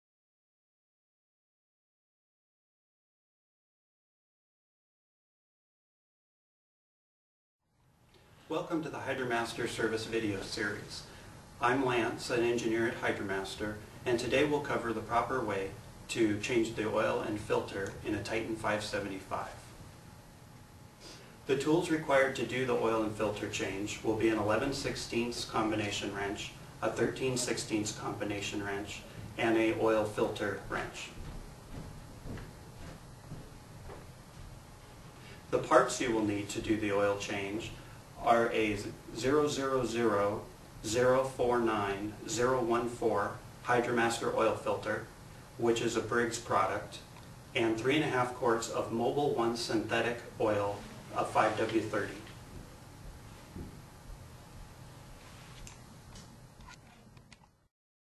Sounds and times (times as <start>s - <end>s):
Speech: 8.5s - 19.7s, 21.5s - 31.2s, 35.6s - 52.4s.